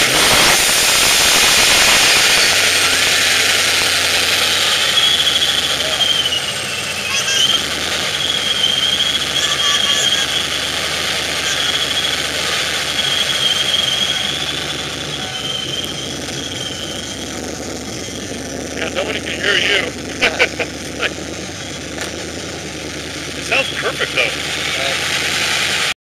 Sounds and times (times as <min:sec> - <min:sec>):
Vehicle: 0:00.0 - 0:26.0
Speech: 0:18.8 - 0:19.9, 0:23.4 - 0:25.0.